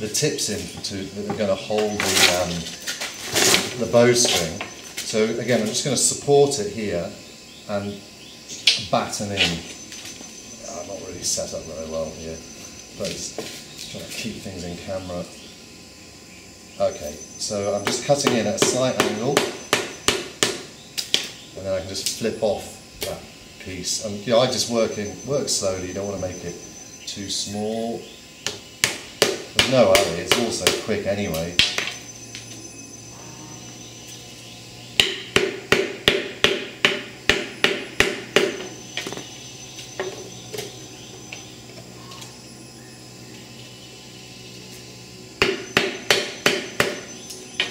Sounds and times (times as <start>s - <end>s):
Speech: 0.0s - 2.7s, 3.7s - 8.0s, 8.8s - 9.7s, 10.6s - 12.4s, 13.0s - 15.4s, 16.8s - 19.4s, 21.6s - 28.1s, 29.6s - 31.6s.